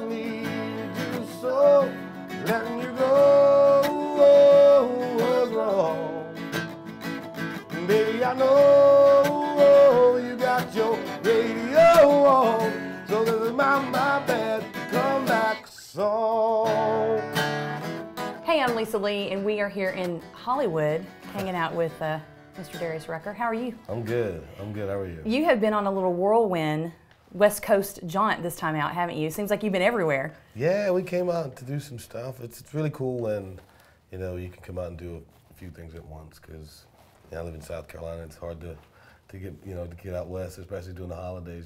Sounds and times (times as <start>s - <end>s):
Background music: 0.0s - 24.4s
Speech: 23.9s - 25.3s, 30.6s - 41.6s.